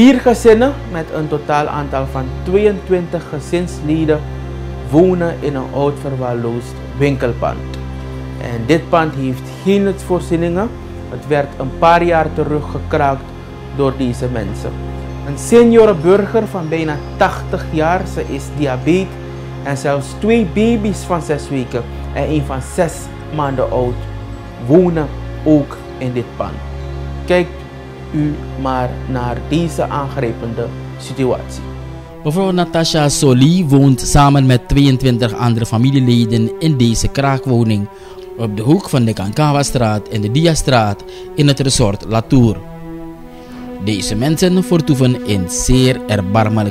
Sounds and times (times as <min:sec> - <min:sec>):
Speech: 0:00.0 - 0:04.3, 0:04.9 - 0:07.7, 0:08.4 - 0:13.2, 0:13.8 - 0:24.0, 0:24.6 - 0:26.6, 0:27.3 - 0:27.6, 0:28.2 - 0:31.6, 0:32.3 - 0:42.6, 0:43.8 - 0:46.7
Music: 0:00.0 - 0:46.7.